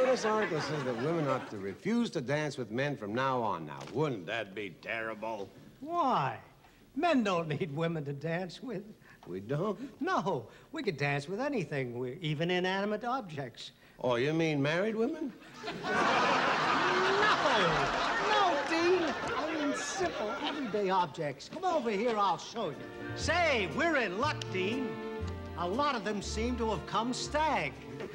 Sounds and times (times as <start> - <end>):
Speech: 0.0 - 15.4, 17.2 - 24.9, 25.6 - 27.8.